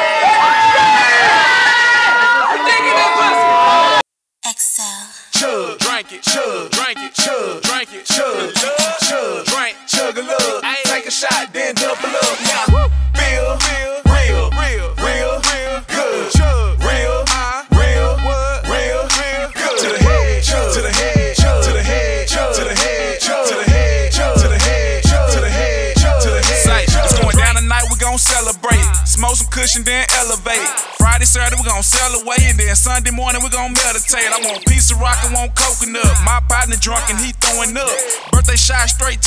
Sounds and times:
Dance music: 0:05.4 - 0:39.2.

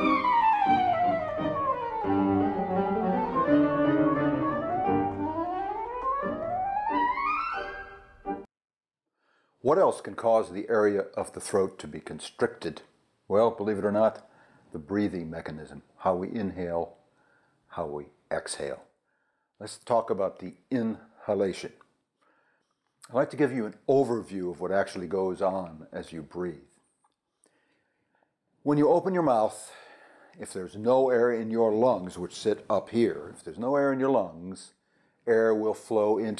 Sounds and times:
Speech: 0:09.6 - 0:17.0, 0:17.7 - 0:18.9, 0:19.6 - 0:21.8, 0:23.0 - 0:26.7, 0:28.7 - 0:29.8, 0:30.4 - 0:36.3.

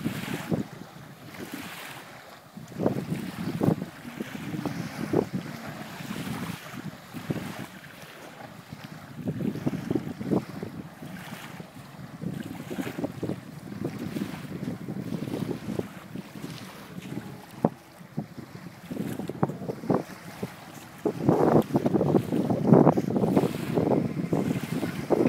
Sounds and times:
Boat, Water vehicle: 0:00.0 - 0:25.2.

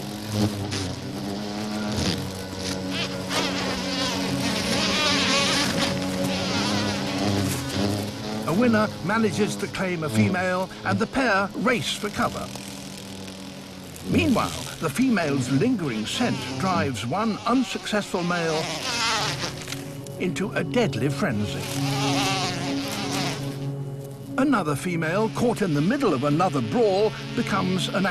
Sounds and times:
Bee, wasp, etc.: 0:00.0 - 0:28.1
Fly, housefly: 0:00.0 - 0:28.1.

